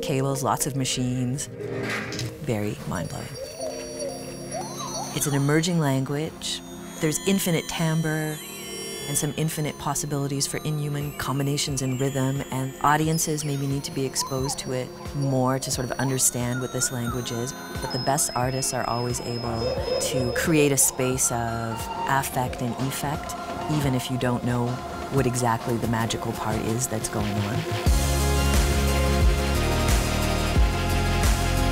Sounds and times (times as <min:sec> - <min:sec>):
Speech: 0:00.0 - 0:01.5, 0:02.4 - 0:03.4, 0:05.2 - 0:08.4, 0:09.1 - 0:27.8
Electronic music: 0:03.0 - 0:31.7.